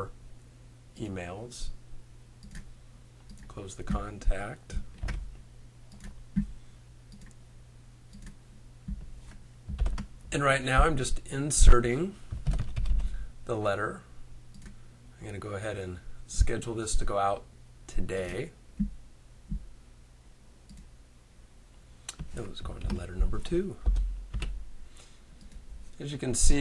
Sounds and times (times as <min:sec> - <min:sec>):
Speech: 0:01.0 - 0:01.8, 0:03.5 - 0:04.8, 0:10.3 - 0:12.2, 0:13.5 - 0:14.1, 0:15.2 - 0:18.6, 0:22.3 - 0:23.8, 0:26.0 - 0:26.6.